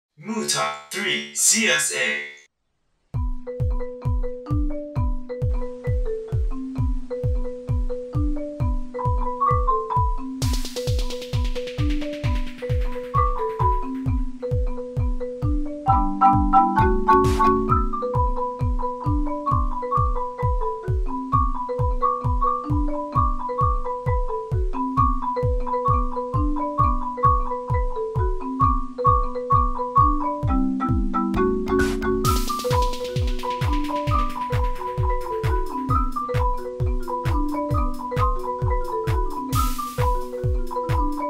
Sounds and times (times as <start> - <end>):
Marimba, xylophone: 3.2 - 41.2
Glockenspiel: 3.3 - 41.2.